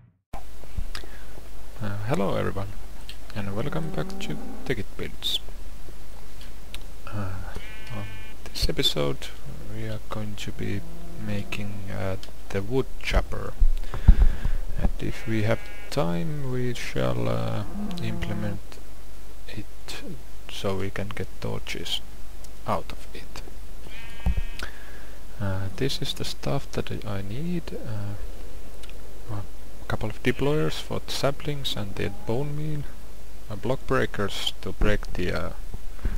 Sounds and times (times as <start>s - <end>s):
Speech: 1.8s - 5.5s, 7.1s - 13.6s, 14.8s - 18.8s, 19.5s - 22.0s, 22.6s - 23.4s, 25.4s - 28.2s, 29.3s - 32.9s, 33.5s - 35.6s.